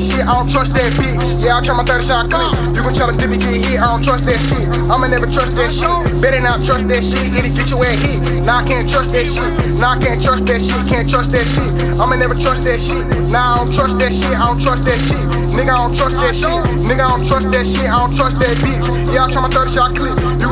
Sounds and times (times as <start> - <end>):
Pop music: 0.0 - 20.5.